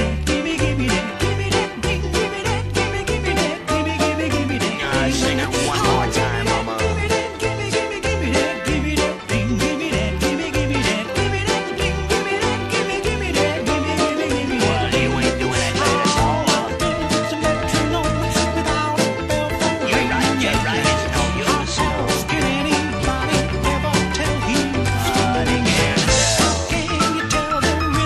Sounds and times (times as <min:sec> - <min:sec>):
Music: 0:00.0 - 0:28.0.